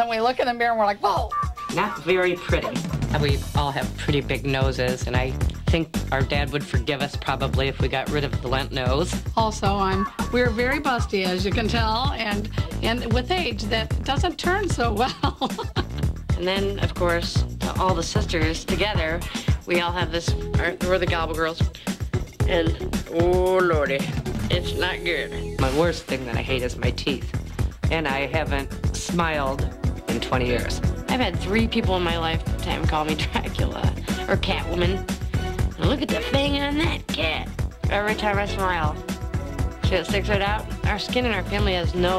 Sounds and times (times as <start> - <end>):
Music: 0.0 - 42.1.